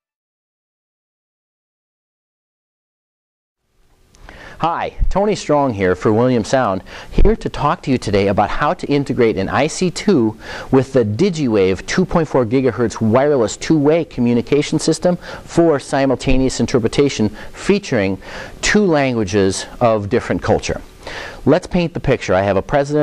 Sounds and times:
Speech: 4.6s - 23.0s.

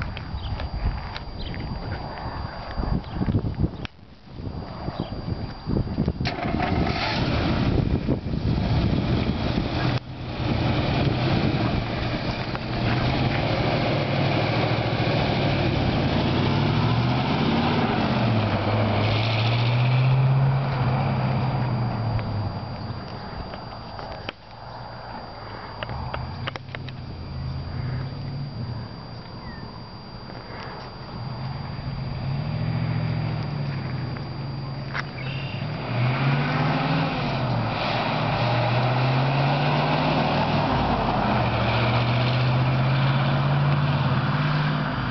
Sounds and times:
Car: 0.0s - 45.1s
Outside, rural or natural: 0.0s - 45.1s.

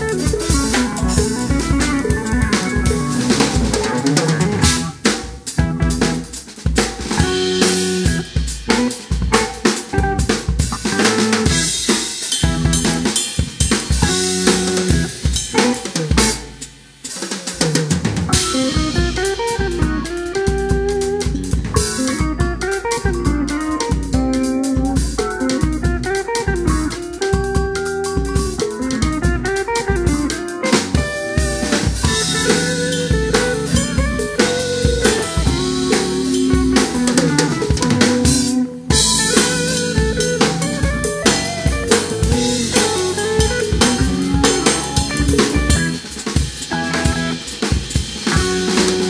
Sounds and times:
Drum kit: 0.0s - 49.1s
Drum roll: 0.0s - 49.1s.

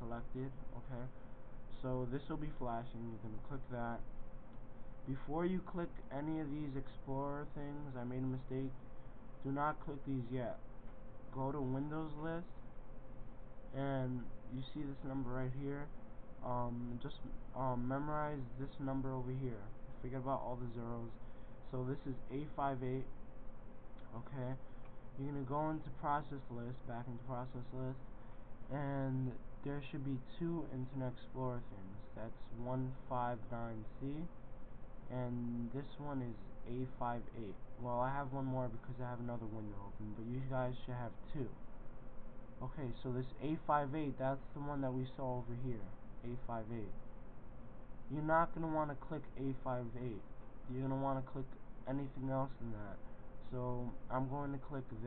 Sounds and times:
Speech: 0.0s - 4.1s, 5.0s - 8.8s, 9.4s - 10.7s, 11.3s - 12.6s, 13.7s - 23.2s, 24.0s - 28.1s, 28.7s - 34.4s, 35.1s - 41.6s, 42.6s - 47.0s, 48.1s - 55.0s.

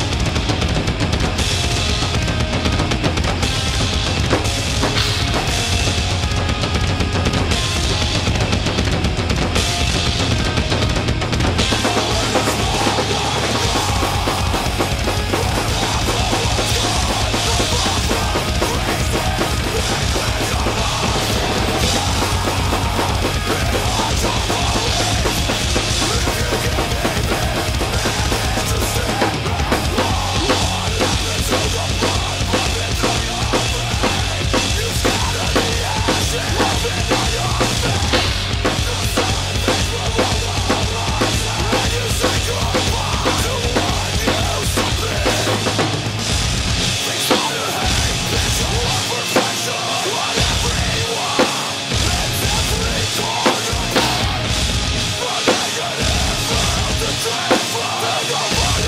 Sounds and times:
Bass drum: 0.0s - 47.0s, 52.0s - 55.2s, 56.0s - 57.3s, 58.5s - 58.8s
Drum kit: 0.0s - 58.8s
Drum roll: 0.0s - 58.8s.

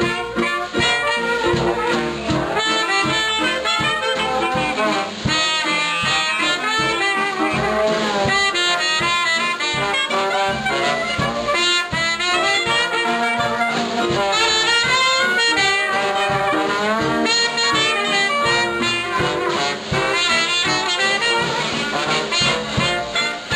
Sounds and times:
Music: 0.0s - 23.5s.

